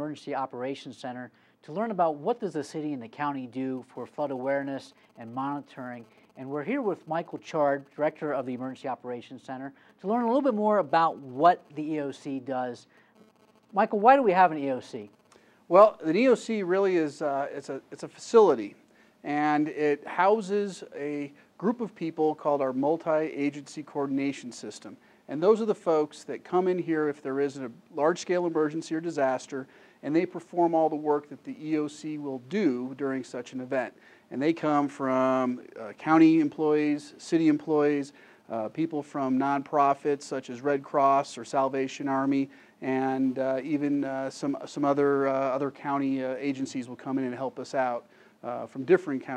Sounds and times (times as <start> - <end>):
Speech: 0.0 - 12.9, 13.8 - 15.1, 15.7 - 49.3.